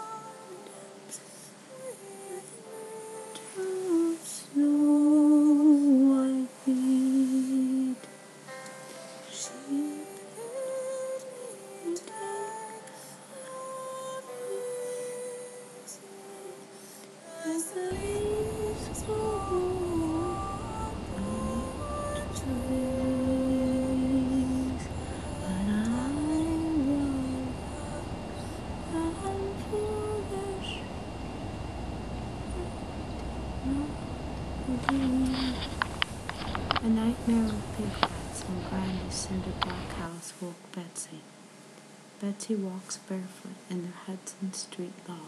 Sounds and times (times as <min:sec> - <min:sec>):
Music: 0:00.0 - 0:33.9.